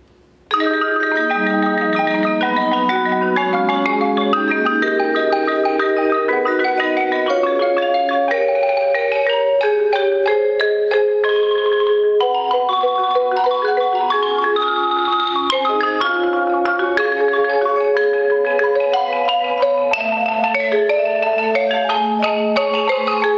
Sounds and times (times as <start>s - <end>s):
Marimba, xylophone: 0.5s - 23.3s.